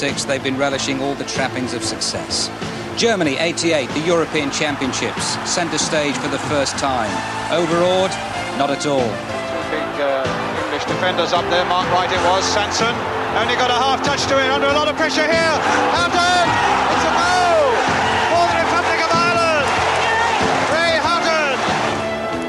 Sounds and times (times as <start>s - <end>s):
Speech: 0.0s - 16.4s
Music: 0.0s - 22.4s.